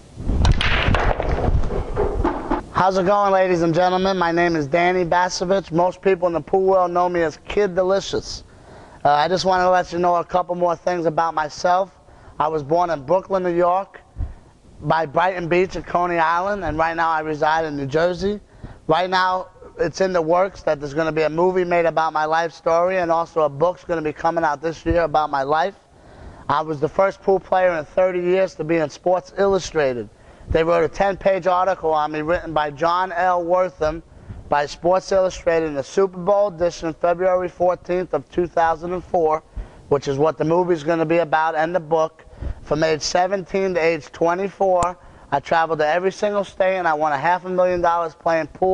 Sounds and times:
Speech: 0:02.8 - 0:14.1, 0:14.8 - 0:25.8, 0:26.5 - 0:48.7.

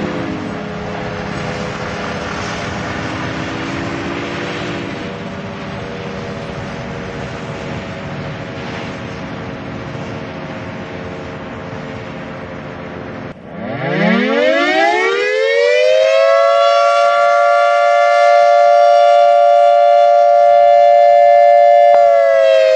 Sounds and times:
Civil defense siren: 0:00.0 - 0:22.7.

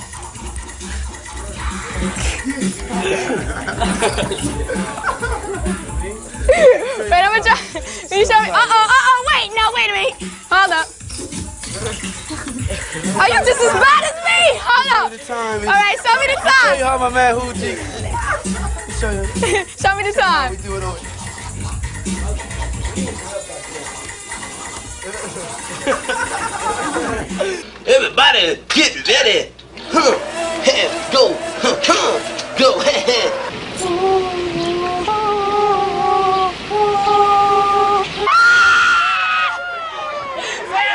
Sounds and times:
Music: 0:00.0 - 0:28.4.

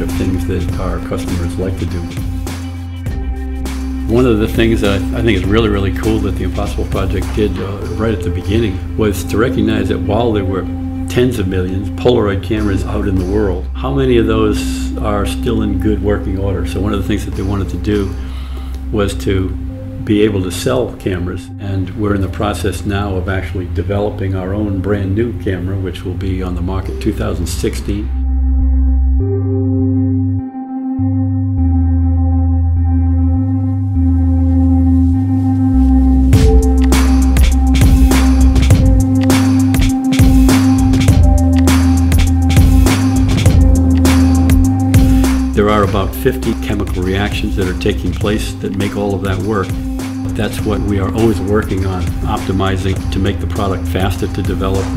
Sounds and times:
Speech: 0:00.0 - 0:02.2, 0:04.1 - 0:18.2, 0:18.9 - 0:28.2, 0:45.5 - 0:54.9
Music: 0:00.0 - 0:54.9.

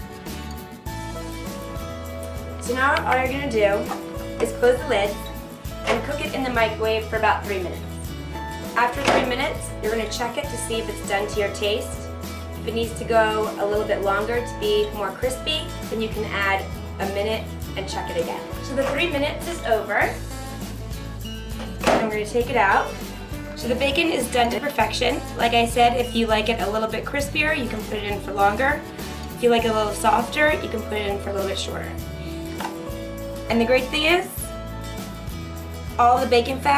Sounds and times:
Music: 0:00.0 - 0:36.7
Speech: 0:02.6 - 0:05.2, 0:05.9 - 0:07.8, 0:08.8 - 0:12.0, 0:12.7 - 0:20.2, 0:21.9 - 0:23.0, 0:23.6 - 0:28.8, 0:29.4 - 0:32.0, 0:33.5 - 0:34.5, 0:36.0 - 0:36.7.

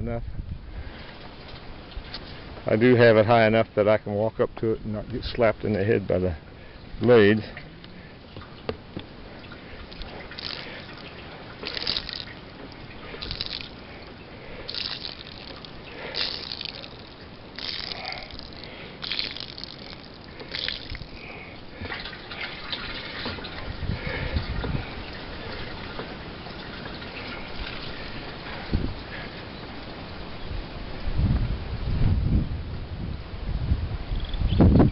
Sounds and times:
Water: 0:00.0 - 0:34.9.

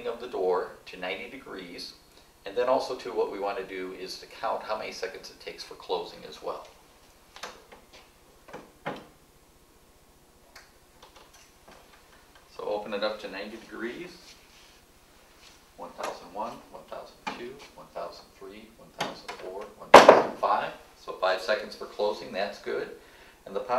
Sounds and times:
Speech: 0:00.0 - 0:06.7, 0:12.5 - 0:14.3, 0:15.8 - 0:23.7.

